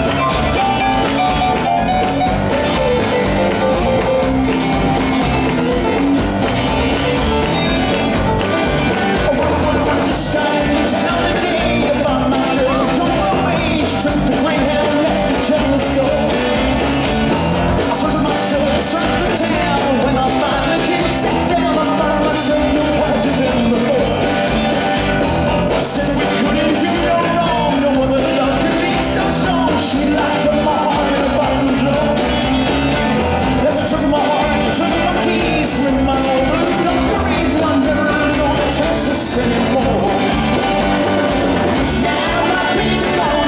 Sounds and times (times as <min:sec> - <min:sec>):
Music: 0:00.0 - 0:43.4.